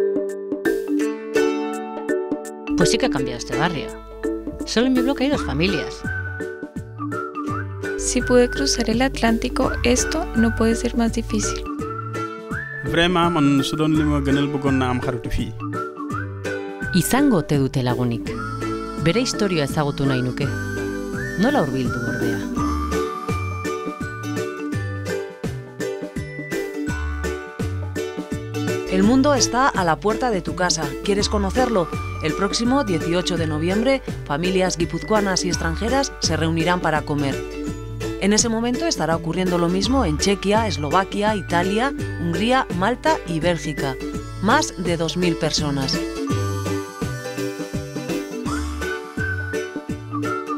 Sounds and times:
Music: 0:00.0 - 0:50.5
Speech: 0:02.8 - 0:03.9, 0:04.7 - 0:06.0, 0:08.0 - 0:11.7, 0:12.9 - 0:15.6, 0:17.0 - 0:18.3, 0:19.0 - 0:20.5, 0:21.4 - 0:22.4, 0:28.9 - 0:37.4, 0:38.2 - 0:46.0.

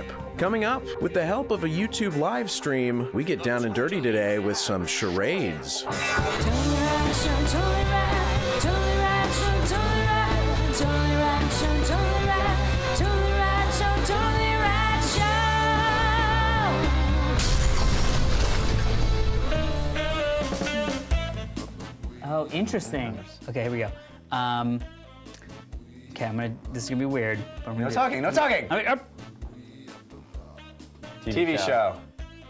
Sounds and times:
Music: 0:00.0 - 0:32.4
Speech: 0:00.4 - 0:05.9, 0:22.2 - 0:24.8, 0:26.2 - 0:29.0.

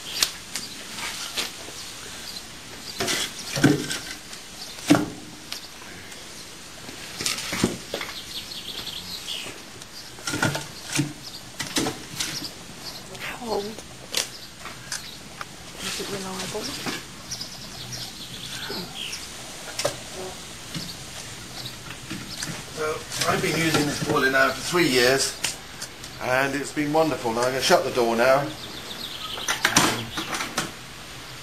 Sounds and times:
Chirp, tweet: 0:08.0 - 0:11.4, 0:17.3 - 0:19.3, 0:28.5 - 0:30.4.

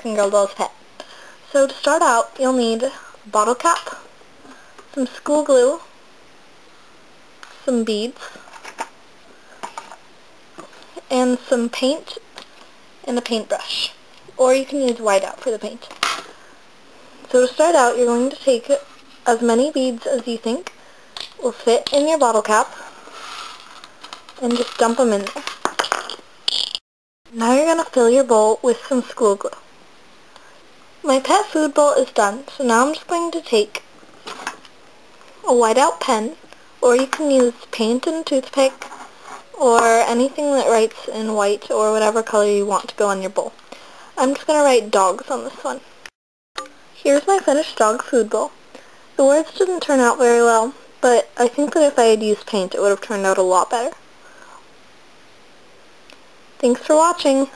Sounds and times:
Speech: 0:00.0 - 0:00.8, 0:01.5 - 0:04.0, 0:04.9 - 0:05.9, 0:07.6 - 0:08.4, 0:11.0 - 0:12.2, 0:13.0 - 0:15.9, 0:17.3 - 0:20.7, 0:21.4 - 0:22.7, 0:24.4 - 0:25.4, 0:27.4 - 0:29.6, 0:31.0 - 0:33.8, 0:35.4 - 0:38.8, 0:39.6 - 0:43.6, 0:44.2 - 0:45.8, 0:47.0 - 0:48.6, 0:49.2 - 0:54.0, 0:56.6 - 0:57.5.

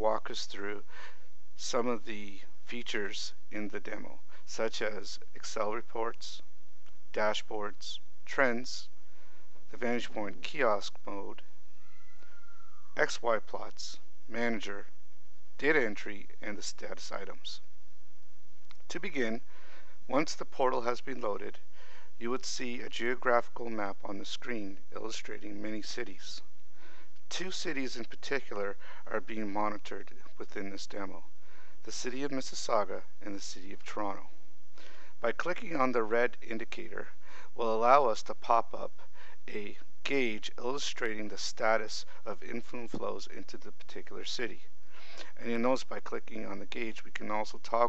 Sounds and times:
Speech: 0:00.0 - 0:00.9, 0:01.6 - 0:06.5, 0:07.1 - 0:08.9, 0:09.7 - 0:11.5, 0:13.0 - 0:14.9, 0:15.6 - 0:17.6, 0:18.9 - 0:19.5, 0:20.1 - 0:21.6, 0:22.2 - 0:26.5, 0:27.3 - 0:34.4, 0:35.2 - 0:44.7, 0:45.3 - 0:47.8.

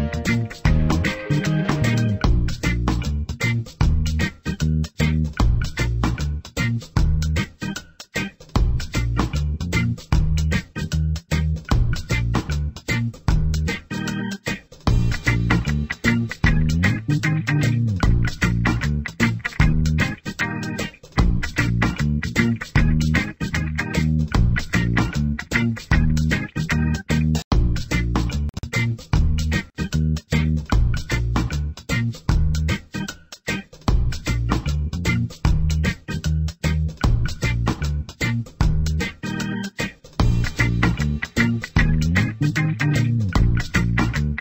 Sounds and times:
Music: 0:00.0 - 0:44.4.

